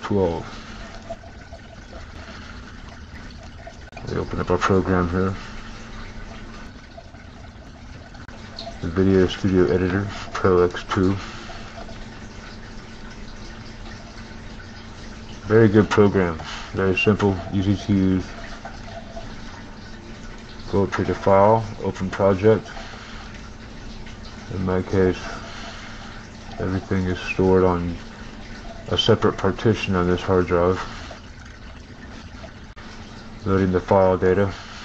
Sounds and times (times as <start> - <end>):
Speech: 0.0 - 0.5, 4.0 - 5.4, 8.8 - 11.2, 15.4 - 18.3, 20.7 - 22.7, 24.5 - 25.4, 26.6 - 28.0, 28.9 - 30.9, 33.4 - 34.6.